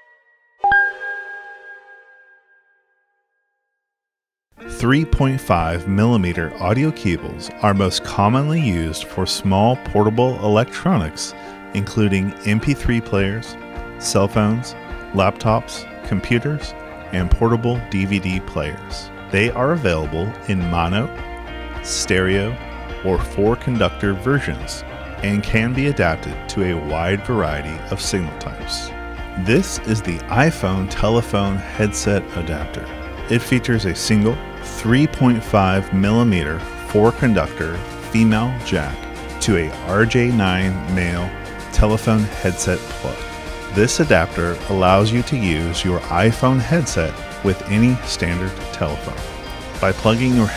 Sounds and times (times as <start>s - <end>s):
Music: 4.6s - 50.5s
Speech: 4.7s - 21.2s, 21.8s - 50.5s.